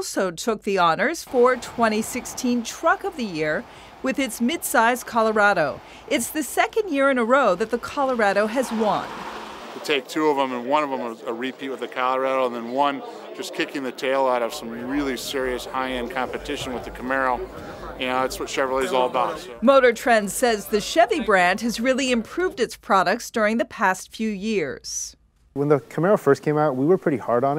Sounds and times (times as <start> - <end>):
Speech: 0.0 - 9.1, 9.8 - 27.5
Car: 1.3 - 10.1.